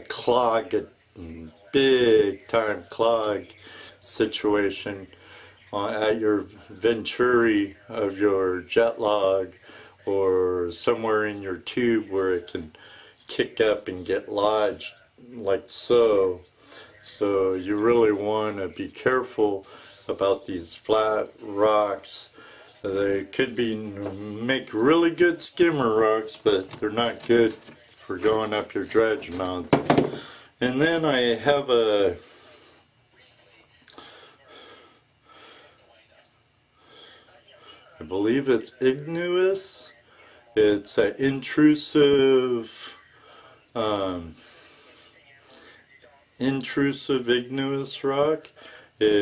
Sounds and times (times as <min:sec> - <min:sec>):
Speech: 0:00.0 - 0:34.8, 0:37.2 - 0:49.2.